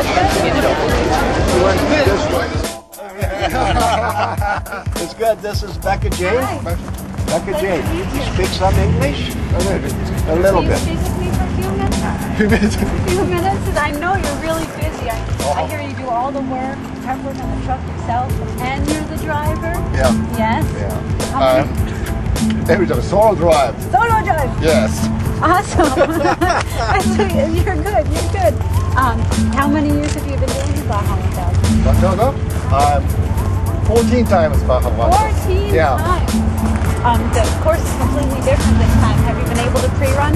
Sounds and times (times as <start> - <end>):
Music: 0.0 - 40.3.